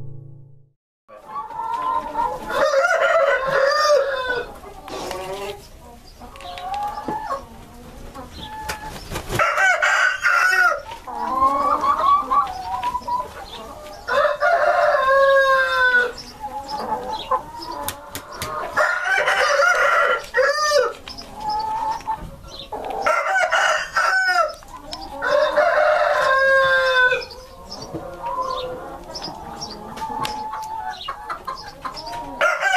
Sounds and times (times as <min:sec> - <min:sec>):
Cluck: 0:01.1 - 0:03.9, 0:04.5 - 0:09.7, 0:10.6 - 0:14.0, 0:15.6 - 0:20.3, 0:20.9 - 0:23.3, 0:26.2 - 0:32.7
Crowing, cock-a-doodle-doo: 0:02.5 - 0:04.5, 0:09.4 - 0:10.8, 0:14.1 - 0:16.1, 0:18.8 - 0:20.9, 0:23.0 - 0:24.6, 0:25.2 - 0:27.3, 0:32.4 - 0:32.7.